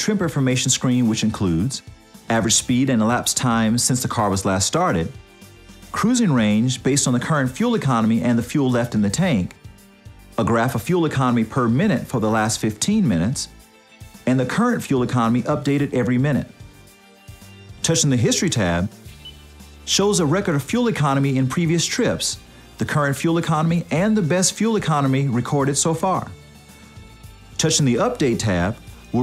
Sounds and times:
Speech: 0:00.0 - 0:05.2, 0:05.9 - 0:09.6, 0:10.4 - 0:13.6, 0:14.2 - 0:16.6, 0:17.8 - 0:19.0, 0:19.9 - 0:26.4, 0:27.6 - 0:29.2
Music: 0:00.0 - 0:29.2.

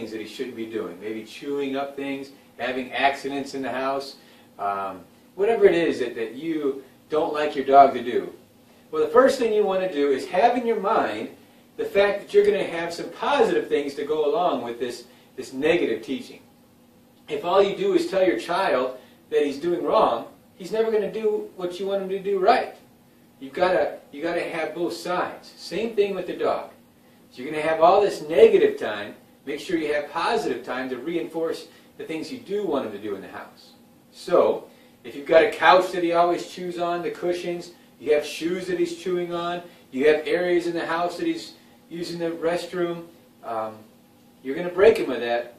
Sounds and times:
Speech: 0:00.0 - 0:16.5, 0:17.3 - 0:45.5.

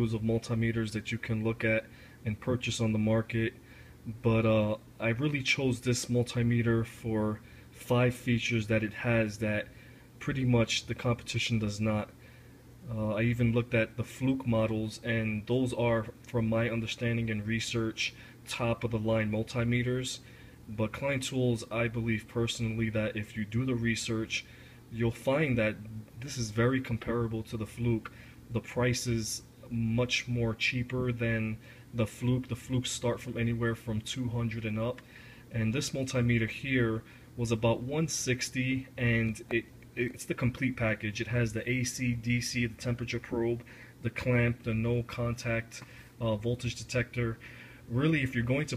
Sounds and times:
Speech: 0:00.0 - 0:12.2, 0:12.8 - 0:48.7.

